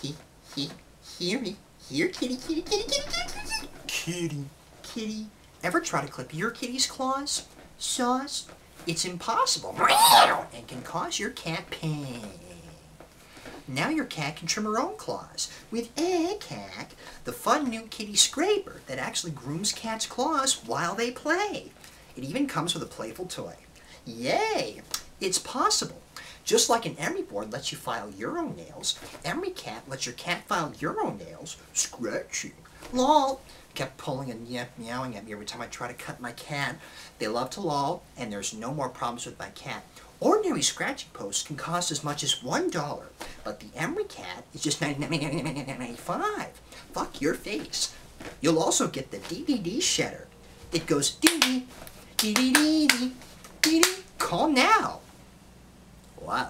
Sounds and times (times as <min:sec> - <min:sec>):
Speech: 0:00.0 - 0:13.0, 0:13.7 - 0:55.1, 0:56.2 - 0:56.4.